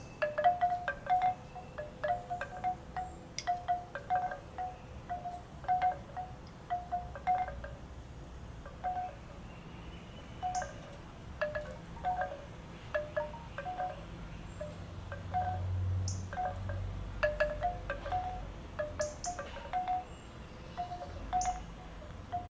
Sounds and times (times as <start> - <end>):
Wind chime: 0.0 - 7.9, 8.6 - 22.5.